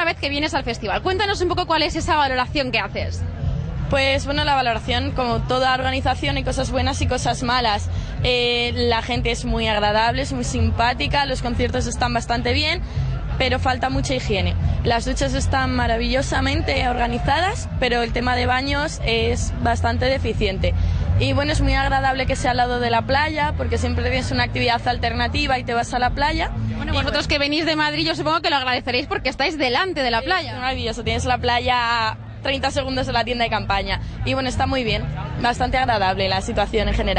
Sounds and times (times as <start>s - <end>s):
Speech: 0.0s - 3.2s, 3.9s - 37.1s.